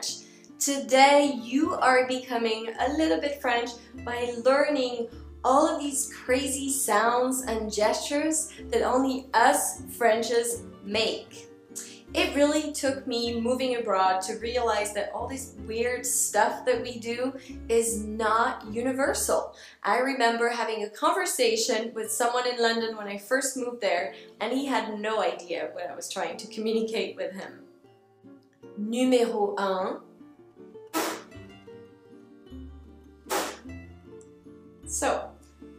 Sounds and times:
Speech: 0:00.0 - 0:11.4, 0:12.1 - 0:27.6, 0:28.8 - 0:30.0, 0:34.9 - 0:35.4
Music: 0:00.0 - 0:35.7.

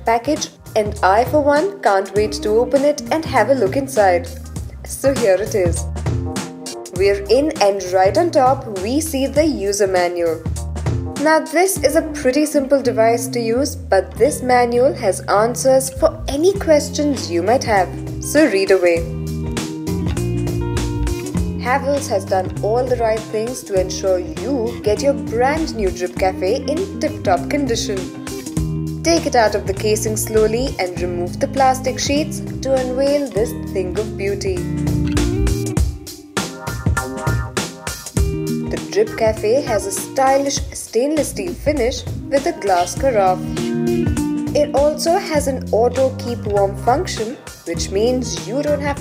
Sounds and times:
Speech: 0:00.0 - 0:05.8, 0:06.9 - 0:10.4, 0:11.2 - 0:19.1, 0:21.6 - 0:28.1, 0:29.0 - 0:34.7, 0:38.8 - 0:43.5, 0:44.6 - 0:49.0
Music: 0:00.0 - 0:49.0.

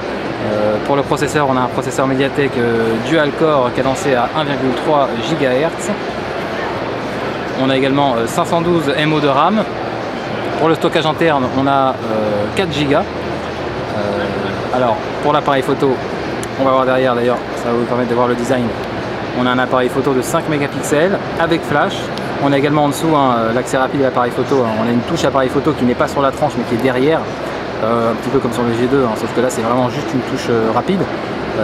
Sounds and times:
Speech: 0:00.4 - 0:06.0, 0:07.6 - 0:09.7, 0:10.6 - 0:13.2, 0:13.9 - 0:18.8, 0:19.4 - 0:31.6.

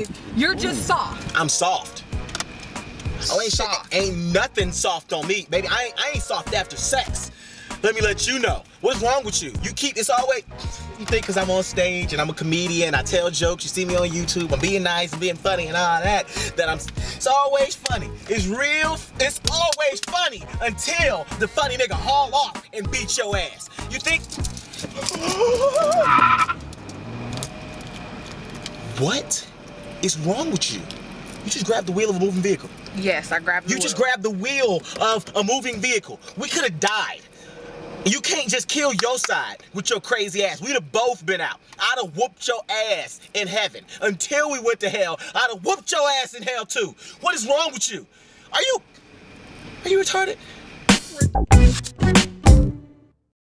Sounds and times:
Car: 0:00.0 - 0:50.9
Speech: 0:03.2 - 0:24.3, 0:28.9 - 0:37.3, 0:38.1 - 0:48.8, 0:49.8 - 0:50.4.

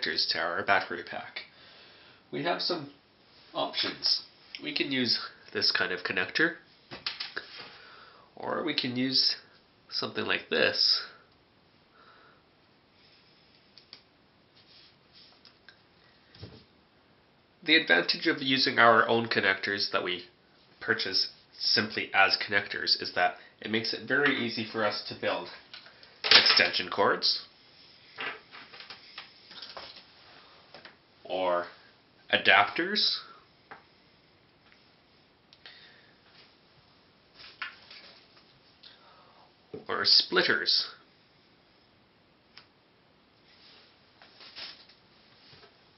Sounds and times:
Speech: 0:00.0 - 0:01.5, 0:02.3 - 0:06.6, 0:08.4 - 0:11.2, 0:17.6 - 0:25.6, 0:26.4 - 0:27.5, 0:31.2 - 0:33.4, 0:39.8 - 0:41.0.

